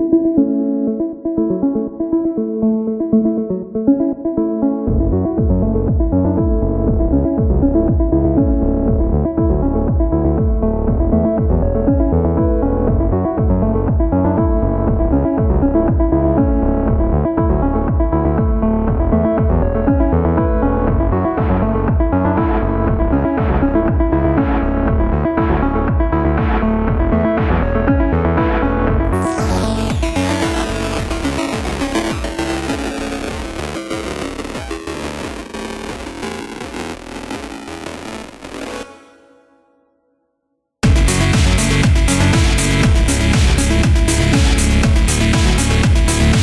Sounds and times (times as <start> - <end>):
Music: 0.0 - 46.4.